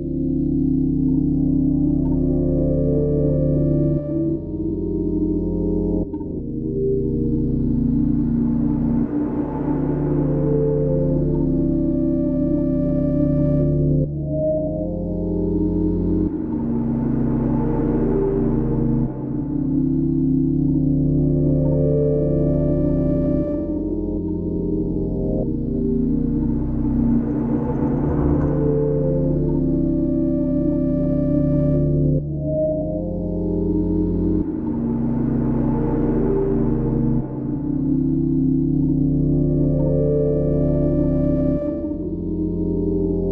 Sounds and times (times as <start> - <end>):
Music: 0.0 - 43.3.